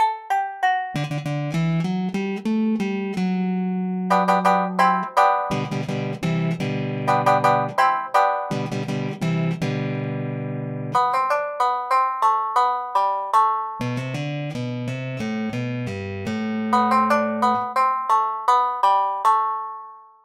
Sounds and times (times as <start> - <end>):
Guitar: 0.9 - 12.0, 13.8 - 17.9.